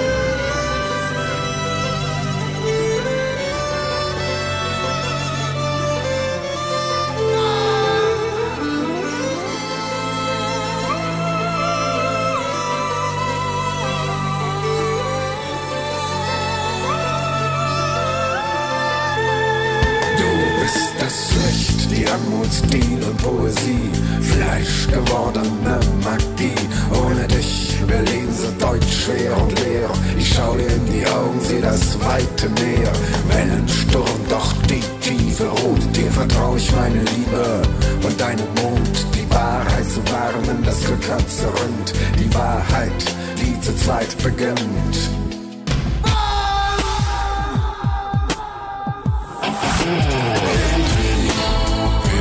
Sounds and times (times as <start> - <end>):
Musical instrument: 0.0 - 47.6, 49.4 - 52.2.